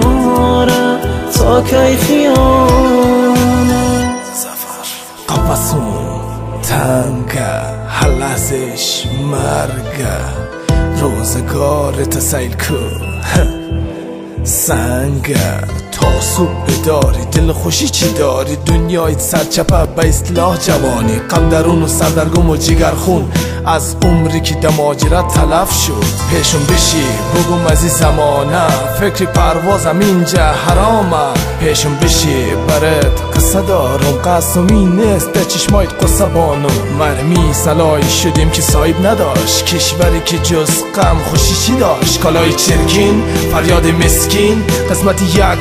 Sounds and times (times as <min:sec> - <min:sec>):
Rhythm and blues: 0:00.0 - 0:45.6.